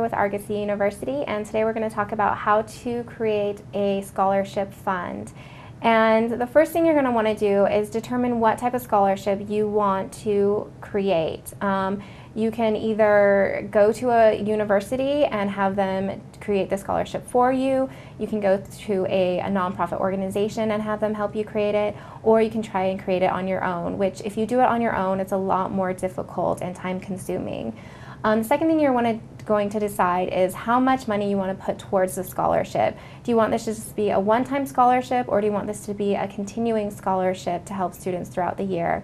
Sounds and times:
Inside, small room: 0.0s - 39.0s
Speech: 0.0s - 39.0s.

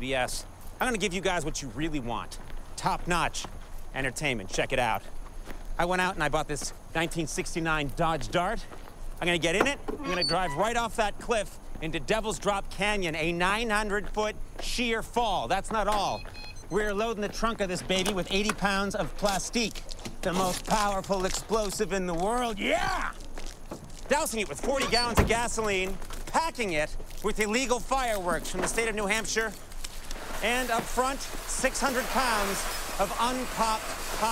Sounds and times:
Speech: 0.0s - 5.1s, 5.8s - 23.2s, 24.1s - 29.6s, 30.4s - 34.3s.

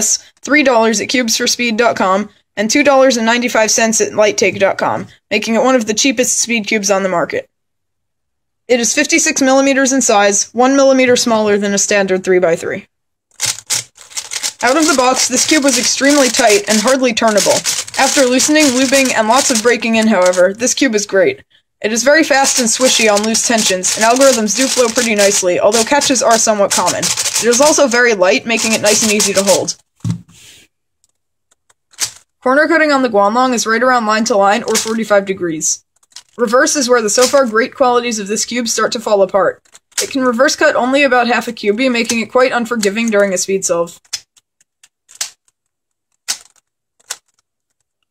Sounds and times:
Speech: 0.0s - 7.5s, 8.7s - 12.9s, 14.6s - 29.8s, 32.4s - 35.8s, 36.4s - 44.0s.

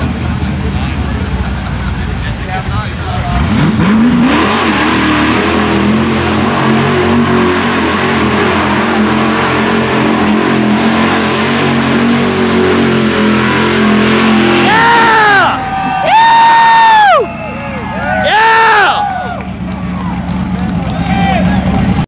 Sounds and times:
Speech: 0.2s - 3.5s, 20.6s - 22.0s.

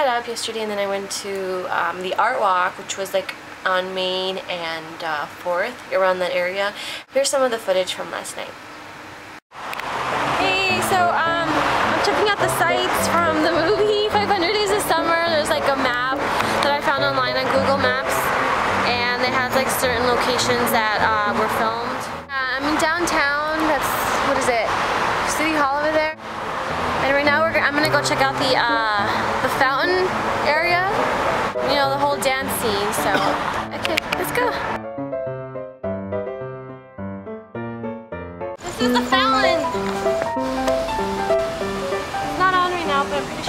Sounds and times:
Speech: 0.0s - 8.6s, 14.2s - 18.2s, 18.9s - 24.7s, 25.3s - 26.2s, 27.0s - 31.0s, 31.6s - 34.7s, 38.6s - 39.7s, 42.4s - 43.4s
Music: 10.0s - 22.4s, 26.2s - 43.4s.

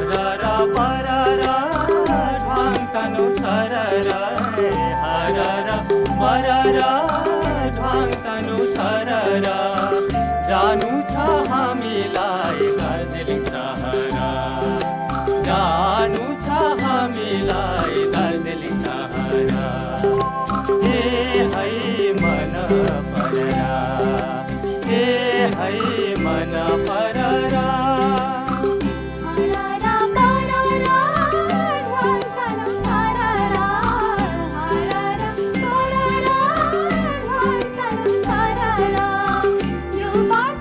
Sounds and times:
Folk music: 0.0s - 40.6s
Singing: 0.0s - 40.6s.

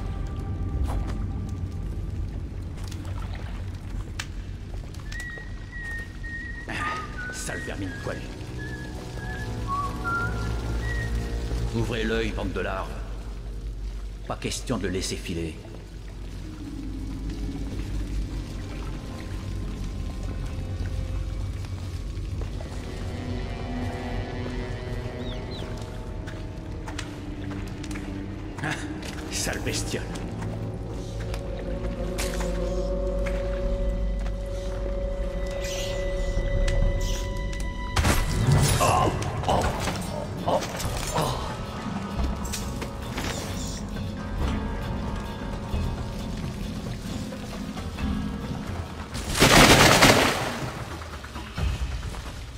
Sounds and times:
Rain on surface: 0.0s - 52.5s
Raindrop: 0.0s - 52.5s.

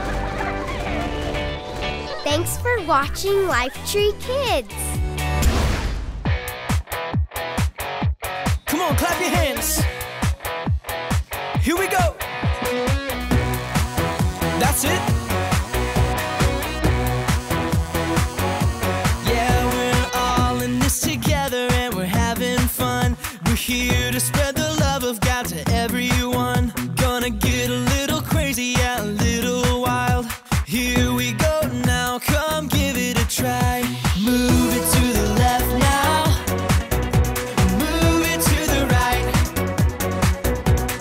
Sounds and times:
Pop music: 0.0s - 41.0s.

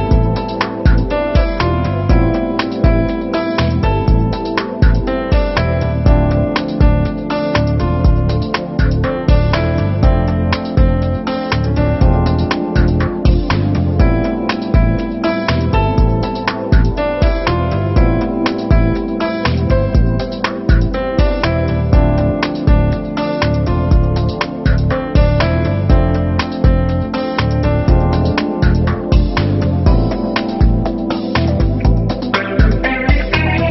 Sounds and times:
Background music: 0.0s - 33.7s.

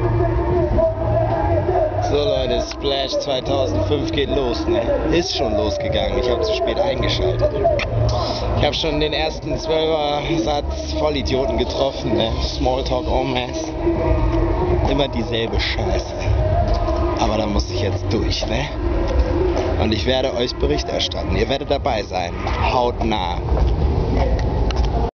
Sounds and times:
Music: 0.0s - 25.1s
Speech: 1.7s - 13.8s, 14.8s - 16.3s, 17.2s - 18.8s, 19.8s - 23.5s.

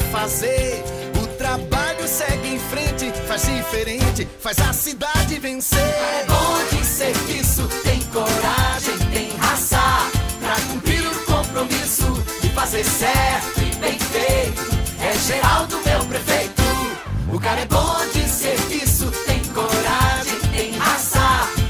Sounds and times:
Jingle (music): 0.0s - 21.6s.

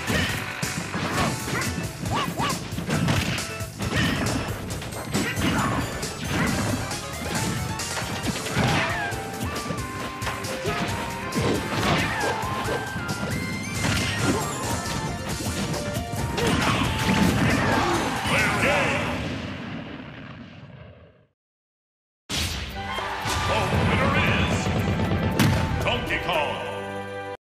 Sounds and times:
Whack, thwack: 0.0s - 6.8s, 7.4s - 9.1s, 10.7s - 12.4s, 13.8s - 14.4s, 16.4s - 17.8s.

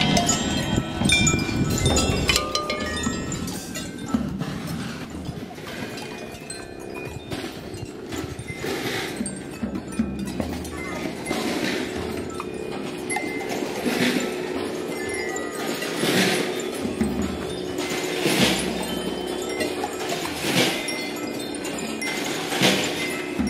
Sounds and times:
Percussion: 0.0s - 23.4s.

